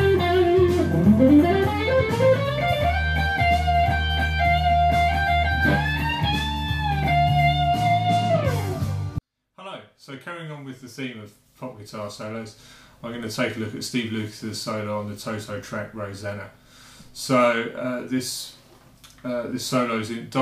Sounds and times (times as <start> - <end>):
Electric guitar: 0.0 - 9.2
Speech: 9.6 - 16.6, 17.2 - 18.6, 19.2 - 20.4.